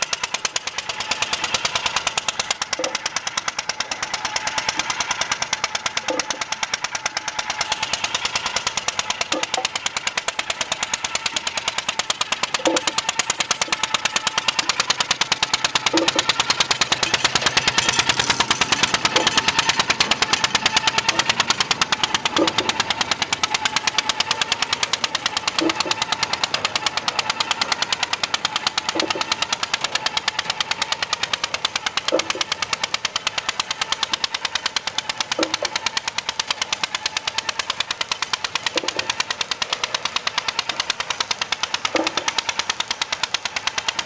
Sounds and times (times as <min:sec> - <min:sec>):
Engine: 0:00.0 - 0:44.0
Outside, rural or natural: 0:00.0 - 0:44.0.